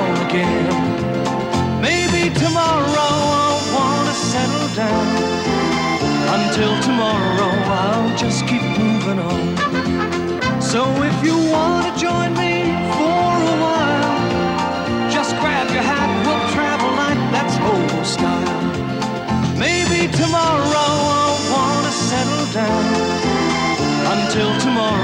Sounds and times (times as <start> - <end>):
Music: 0.0 - 25.0.